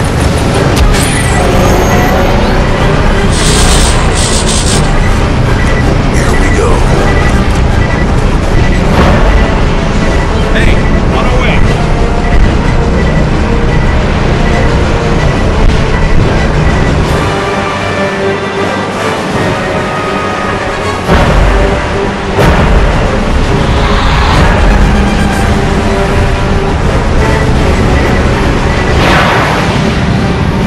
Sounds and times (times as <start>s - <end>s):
Music: 0.0s - 30.6s.